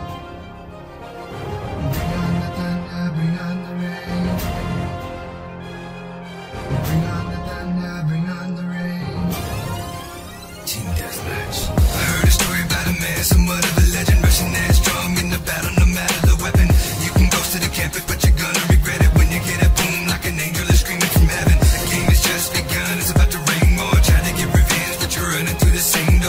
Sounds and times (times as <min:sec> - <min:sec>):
Hip hop music: 0:00.0 - 0:26.2.